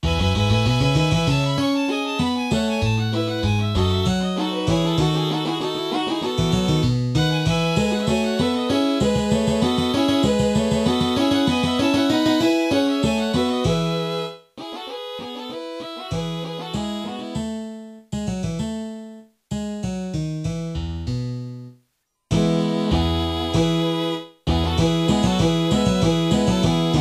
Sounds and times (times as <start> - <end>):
Musical instrument: 0.0 - 19.2, 22.3 - 27.0.